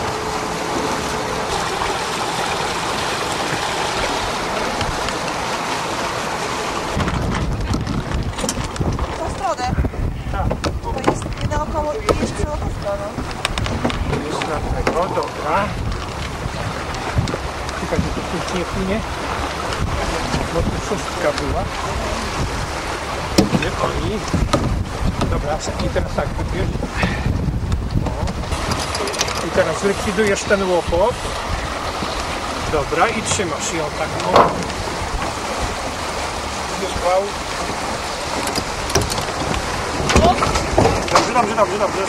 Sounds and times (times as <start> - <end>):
Sailboat, sailing ship: 0.0 - 42.0
Speech: 29.4 - 31.2, 32.7 - 34.4, 36.7 - 37.4, 40.2 - 42.0.